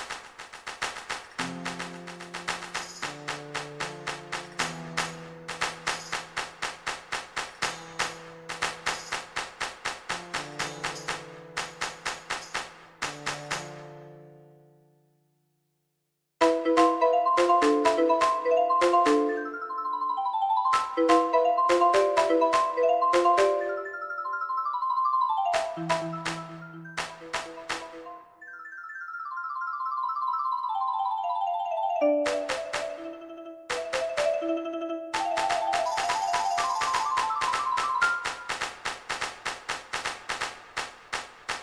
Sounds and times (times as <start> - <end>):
Glockenspiel: 10.4 - 12.7, 16.4 - 38.6
Marimba, xylophone: 16.4 - 38.6.